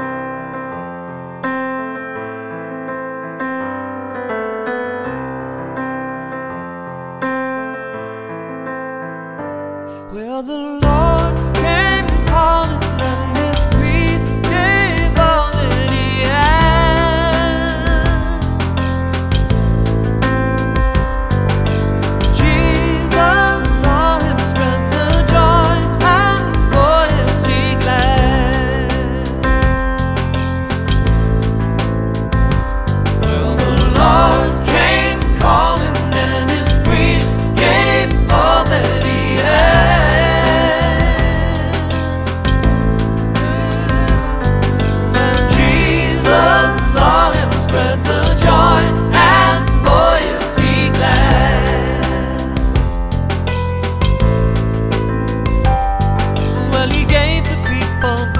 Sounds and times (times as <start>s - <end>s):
Music: 0.0s - 58.3s.